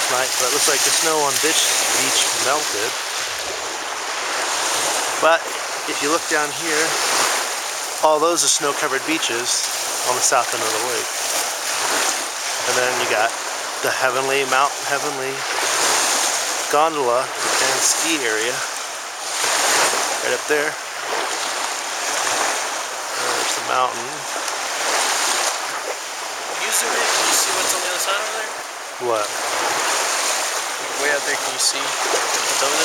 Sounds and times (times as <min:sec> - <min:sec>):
Speech: 0:00.0 - 0:03.0, 0:05.2 - 0:07.0, 0:08.0 - 0:11.1, 0:12.6 - 0:15.4, 0:16.7 - 0:18.7, 0:20.2 - 0:20.8, 0:23.2 - 0:24.3, 0:26.6 - 0:29.3, 0:30.9 - 0:32.8.